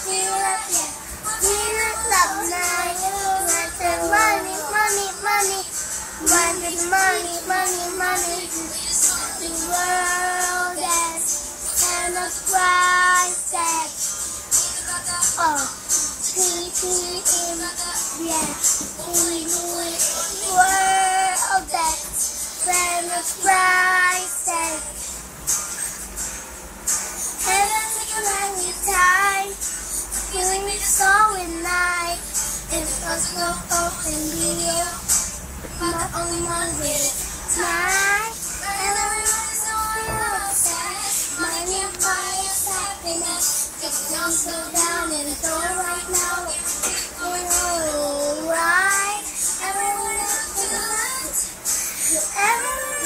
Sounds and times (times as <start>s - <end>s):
Child singing: 0.0s - 25.0s, 27.4s - 35.2s, 35.8s - 53.0s
Music: 0.0s - 53.0s.